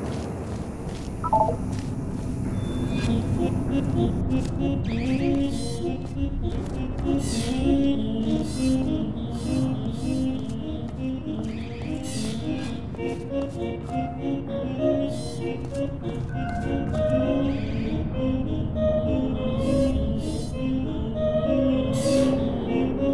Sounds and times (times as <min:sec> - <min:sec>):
Music: 0:02.4 - 0:23.1.